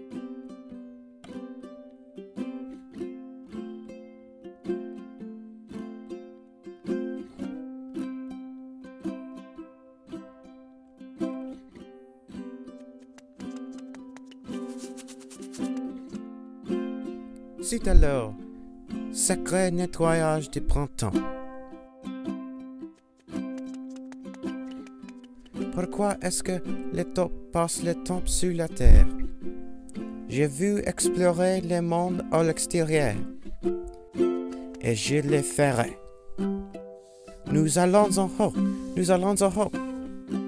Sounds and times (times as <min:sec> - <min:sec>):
Music: 0:00.0 - 0:40.4
Speech: 0:17.6 - 0:18.4, 0:19.2 - 0:21.2, 0:25.7 - 0:29.2, 0:30.3 - 0:33.3, 0:34.8 - 0:36.0, 0:37.5 - 0:39.8.